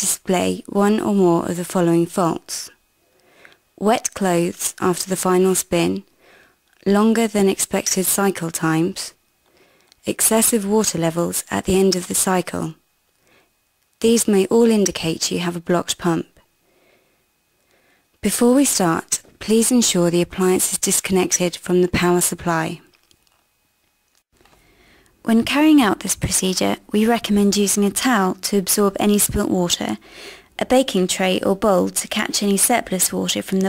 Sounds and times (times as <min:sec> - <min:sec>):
Speech: 0:00.0 - 0:02.8, 0:03.8 - 0:06.1, 0:06.8 - 0:09.2, 0:10.0 - 0:12.8, 0:14.0 - 0:16.4, 0:18.2 - 0:22.9, 0:25.2 - 0:30.0, 0:30.6 - 0:33.6.